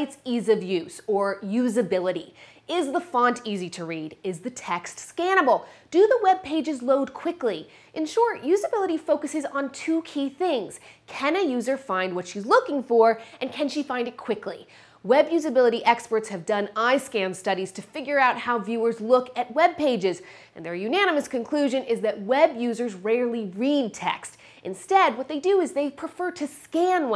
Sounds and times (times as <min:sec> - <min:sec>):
Speech: 0:00.0 - 0:27.1.